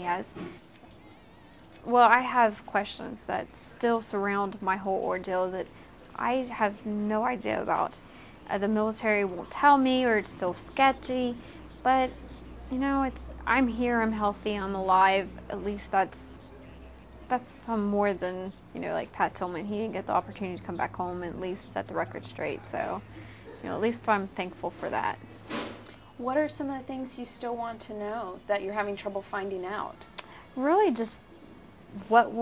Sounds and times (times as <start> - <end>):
Inside, small room: 0.0 - 32.4.